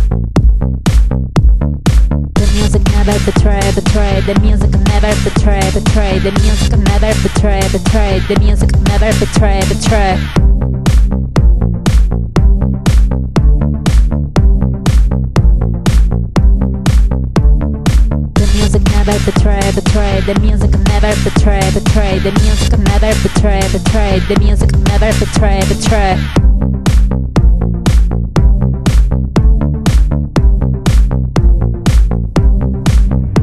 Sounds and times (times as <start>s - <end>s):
House music: 0.0s - 33.4s.